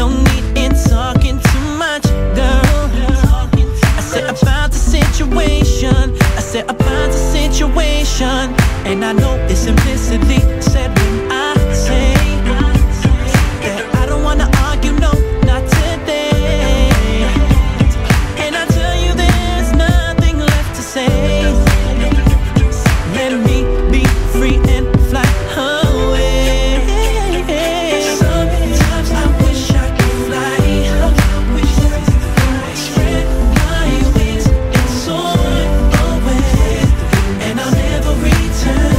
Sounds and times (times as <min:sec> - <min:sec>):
Rhythm and blues: 0:00.0 - 0:38.9.